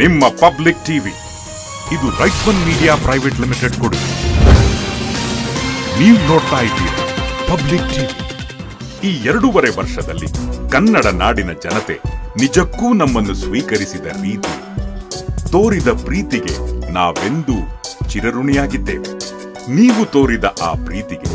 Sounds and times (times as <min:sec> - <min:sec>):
Speech: 0:00.0 - 0:01.2, 0:01.9 - 0:04.1, 0:06.0 - 0:08.1, 0:09.0 - 0:14.5, 0:15.5 - 0:19.1, 0:19.7 - 0:21.3
Music: 0:00.0 - 0:21.3.